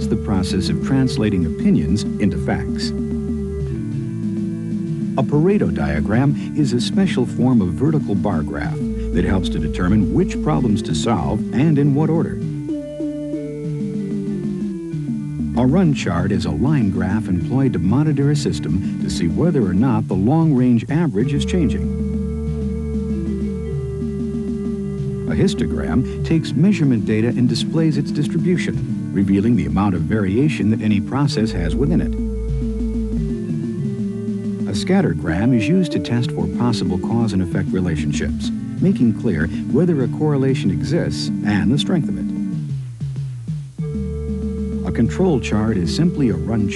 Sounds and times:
Speech: 0.0s - 3.0s, 5.2s - 12.4s, 15.6s - 21.9s, 25.3s - 32.2s, 34.7s - 42.4s, 44.8s - 46.7s
Music: 0.0s - 46.7s.

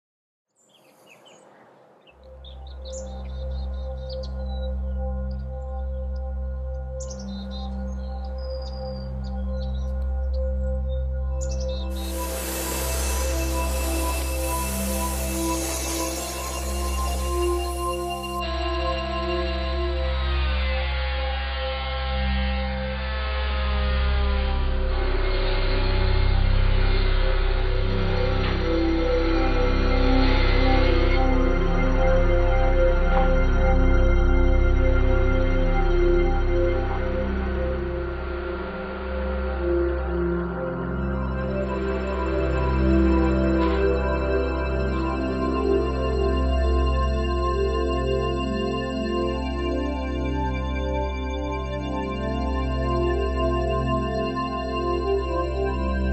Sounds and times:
Music: 2.1s - 56.1s.

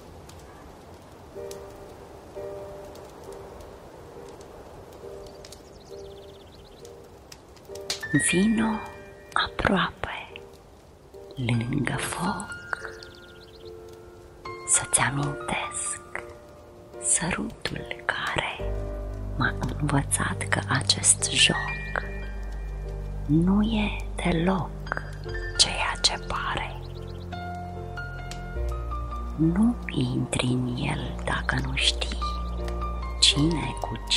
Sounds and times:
Crackle: 0.0s - 34.1s
Music: 0.3s - 34.1s
Speech: 8.1s - 10.3s, 11.4s - 12.9s, 14.7s - 16.2s, 17.1s - 18.6s, 19.4s - 22.0s, 23.3s - 26.8s, 29.4s - 32.4s, 33.2s - 34.1s.

